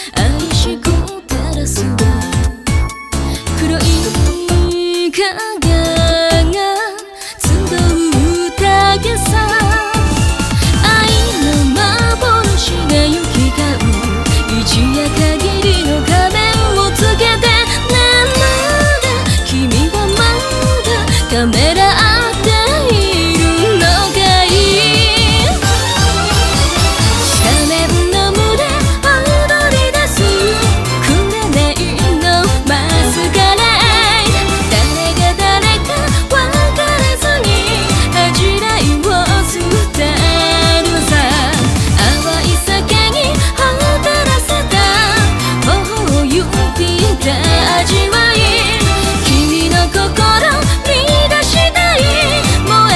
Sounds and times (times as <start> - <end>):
Music: 0.0 - 52.9.